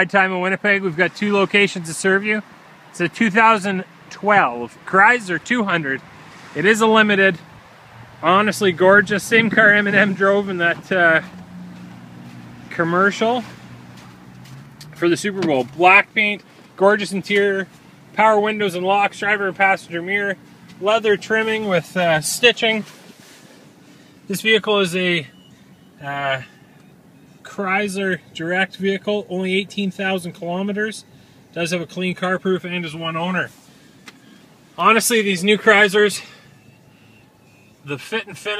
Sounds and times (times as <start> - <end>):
Speech: 0.0 - 6.0, 6.6 - 7.4, 8.2 - 11.3, 12.7 - 13.5, 15.0 - 22.9, 24.3 - 25.3, 26.0 - 26.5, 27.4 - 31.0, 31.6 - 33.6, 34.8 - 36.3, 37.8 - 38.6.